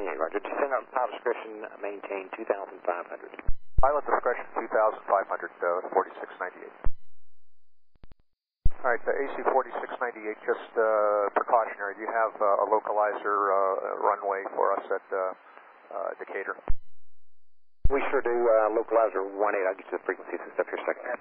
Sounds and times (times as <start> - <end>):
Speech: 0.0 - 6.8, 8.8 - 16.7, 17.9 - 21.2.